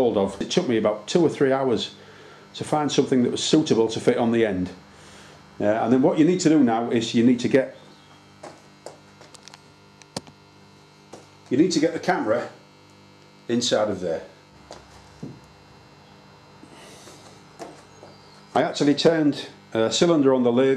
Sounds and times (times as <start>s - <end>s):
Speech: 0.0s - 2.0s, 2.6s - 4.8s, 5.6s - 7.8s, 11.5s - 12.6s, 13.5s - 14.4s, 18.5s - 20.7s.